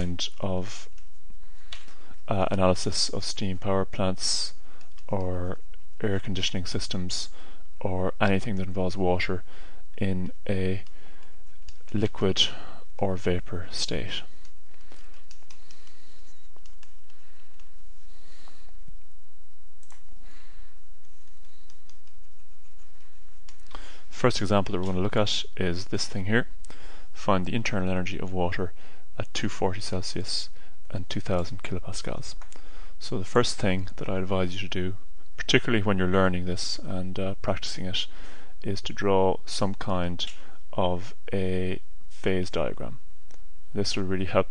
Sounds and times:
Speech: 0.0s - 1.0s, 2.2s - 10.9s, 11.9s - 14.4s, 24.1s - 26.6s, 27.2s - 32.4s, 33.0s - 43.0s, 43.7s - 44.5s.

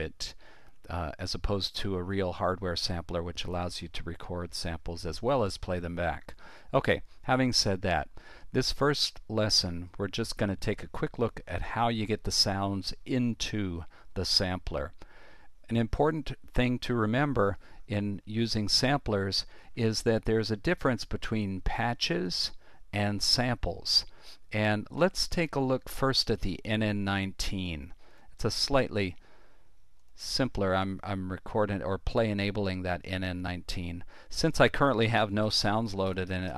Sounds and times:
Speech: 0.0s - 15.0s, 15.7s - 29.2s, 30.2s - 36.5s.

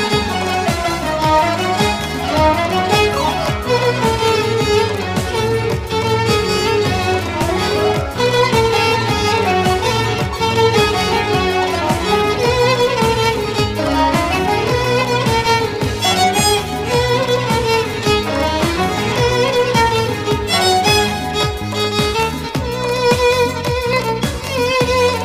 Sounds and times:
Violin, fiddle: 0.0s - 25.2s.

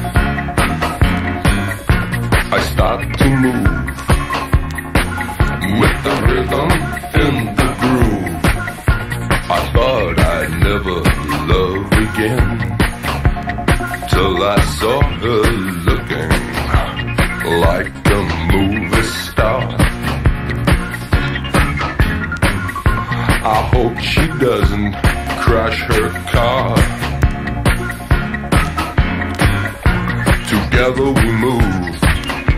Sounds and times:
Exciting music: 0.0s - 32.5s.

